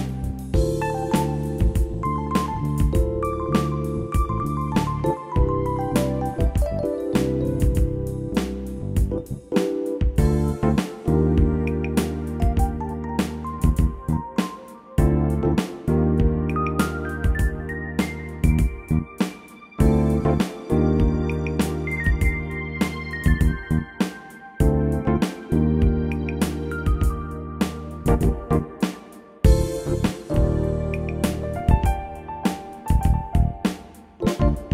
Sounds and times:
Music: 0:00.0 - 0:34.7.

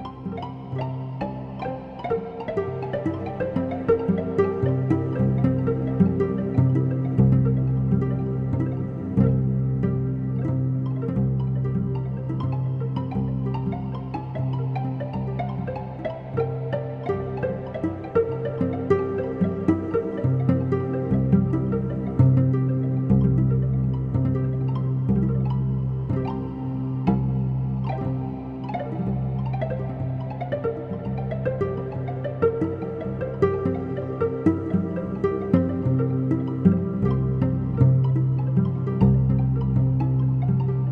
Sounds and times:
Music: 0:00.0 - 0:40.9.

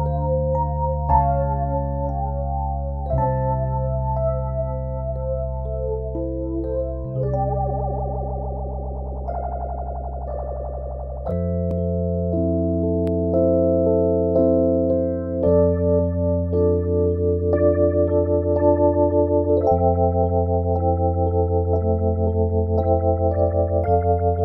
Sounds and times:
Synthesizer: 0:00.0 - 0:24.4.

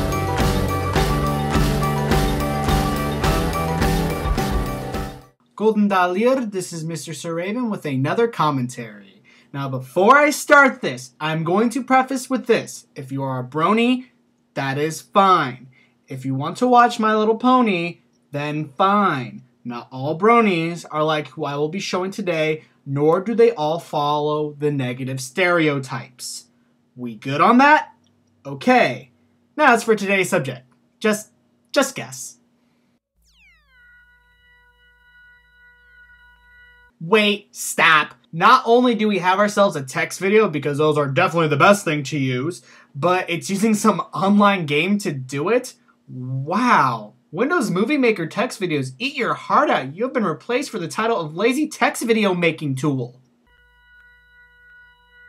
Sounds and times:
Speech: 0:05.6 - 0:32.4, 0:37.0 - 0:53.2.

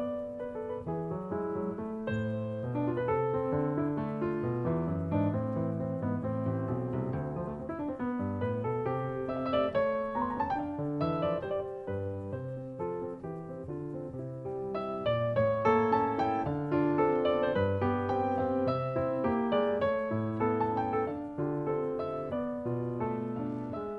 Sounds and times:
Music: 0:00.0 - 0:23.9.

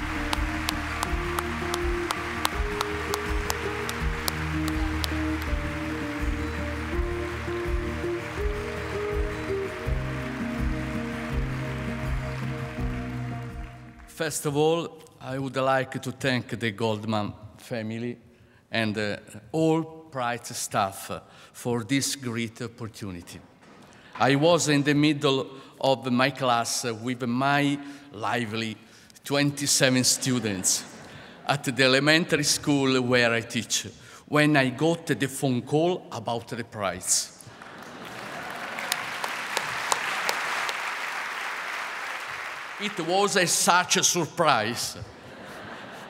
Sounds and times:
Male speech, man speaking: 0:14.1 - 0:23.4, 0:24.2 - 0:30.9, 0:31.5 - 0:37.4, 0:42.8 - 0:45.1
Narration, monologue: 0:14.1 - 0:37.5, 0:42.8 - 0:45.3.

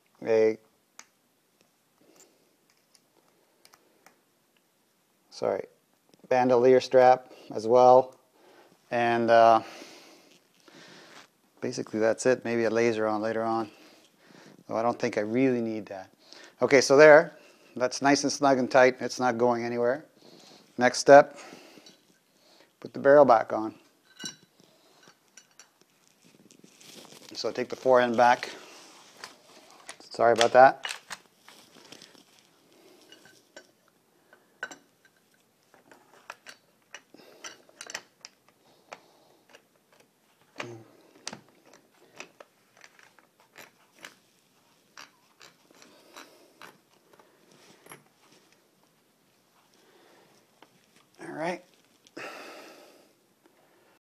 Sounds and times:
Speech: 0:00.2 - 0:00.6, 0:05.3 - 0:08.2, 0:08.9 - 0:09.7, 0:11.6 - 0:13.7, 0:14.7 - 0:20.1, 0:20.8 - 0:21.4, 0:22.8 - 0:23.8, 0:27.3 - 0:28.6, 0:30.0 - 0:30.8, 0:51.2 - 0:51.7.

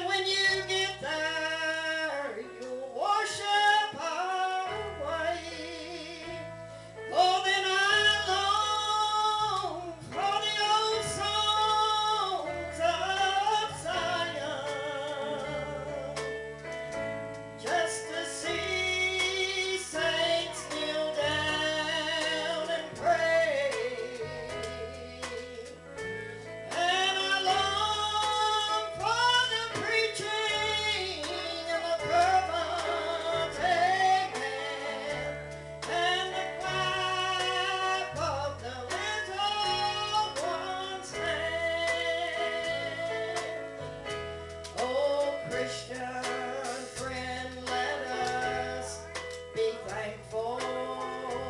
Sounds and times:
Music: 0:00.0 - 0:51.4
Female singing: 0:17.7 - 0:25.6.

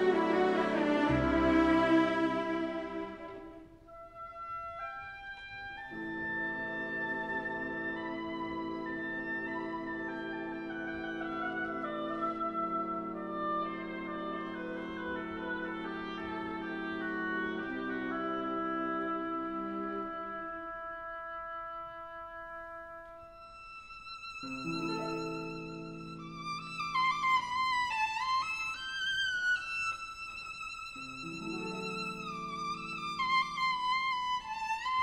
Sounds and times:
Music: 0:00.0 - 0:35.0.

